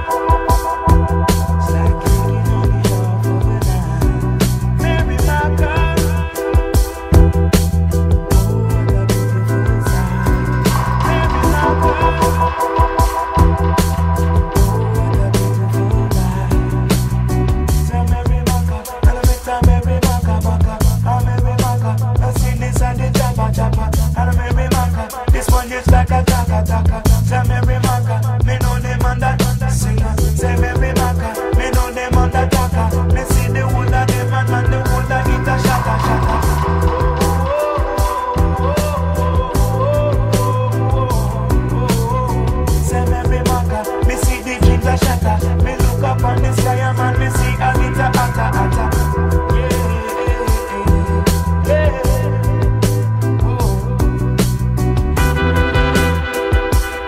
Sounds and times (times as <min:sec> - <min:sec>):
Reggae: 0:00.0 - 0:57.0.